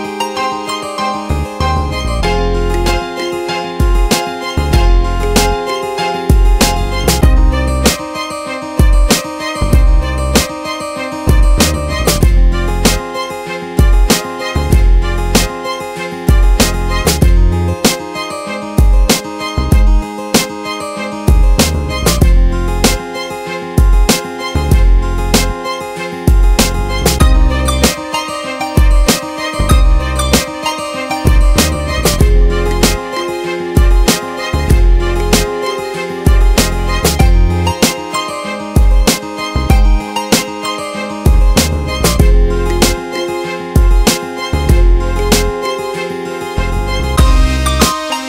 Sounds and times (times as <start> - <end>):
Music: 0.0 - 48.2.